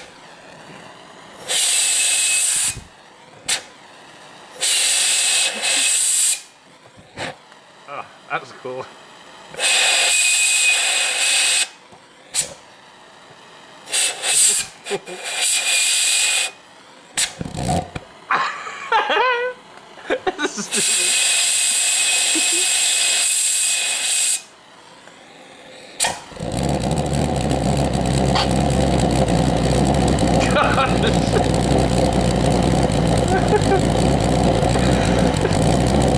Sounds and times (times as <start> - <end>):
Speech: 7.9 - 8.9, 30.4 - 31.4.